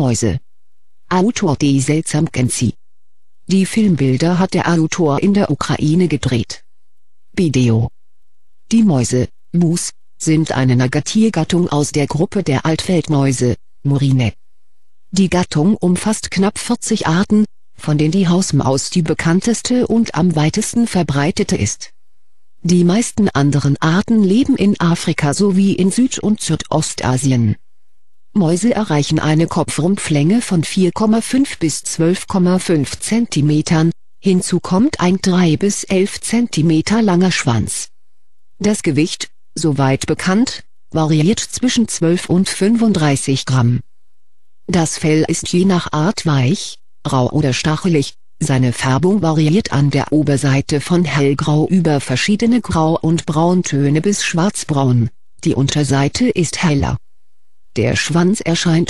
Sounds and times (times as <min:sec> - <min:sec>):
Speech: 0:00.0 - 0:00.4, 0:01.1 - 0:02.8, 0:03.5 - 0:06.6, 0:07.4 - 0:08.0, 0:08.7 - 0:14.4, 0:15.2 - 0:21.9, 0:22.6 - 0:27.6, 0:28.4 - 0:37.9, 0:38.6 - 0:43.8, 0:44.7 - 0:57.0, 0:57.8 - 0:58.8.